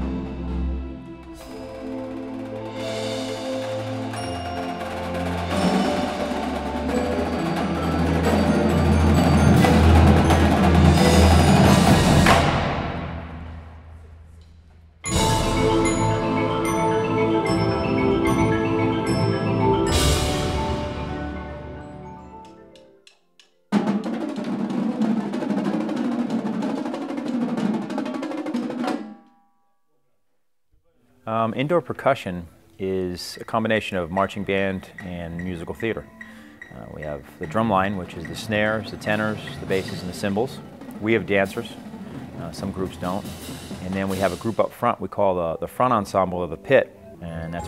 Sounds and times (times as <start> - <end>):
Drum roll: 0.0 - 21.9, 23.7 - 29.3, 36.8 - 45.2
Marimba, xylophone: 1.2 - 12.3, 15.1 - 23.0, 34.2 - 44.6, 45.4 - 47.6
Glockenspiel: 1.3 - 12.0, 15.1 - 23.0, 46.7 - 47.6
Bass drum: 9.2 - 13.8.